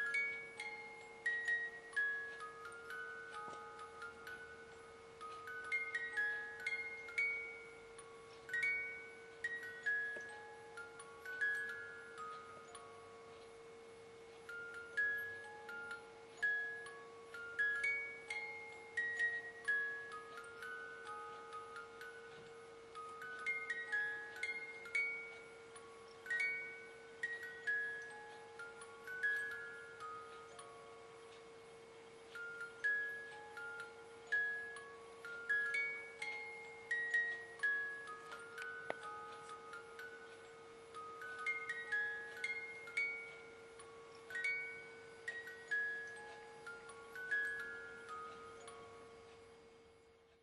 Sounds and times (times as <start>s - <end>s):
Music: 0.0s - 50.4s.